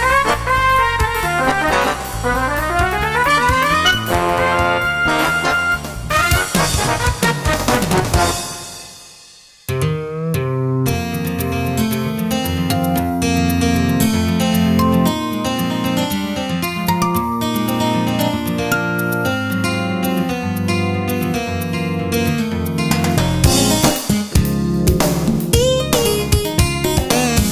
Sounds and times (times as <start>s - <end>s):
Music: 0.0s - 27.5s.